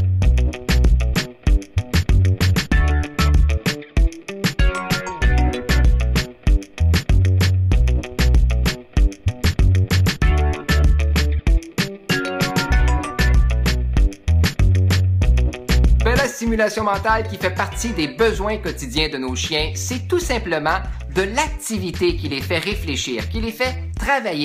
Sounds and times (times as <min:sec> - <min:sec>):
Music: 0:00.0 - 0:24.4
Speech: 0:16.0 - 0:24.4.